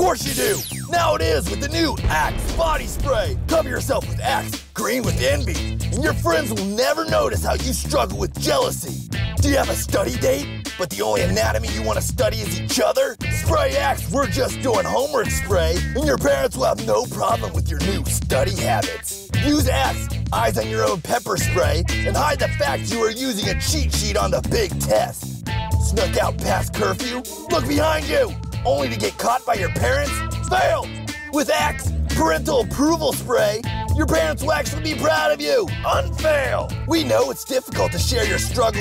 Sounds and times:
Speech: 0:00.0 - 0:25.2, 0:25.8 - 0:38.8
Music: 0:00.0 - 0:38.8.

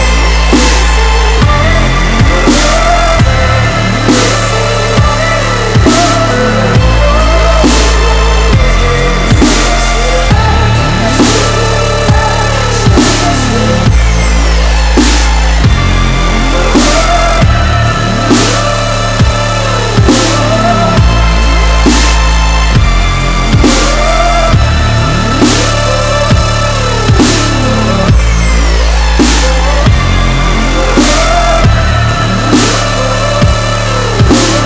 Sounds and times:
Music: 0:00.0 - 0:34.6.

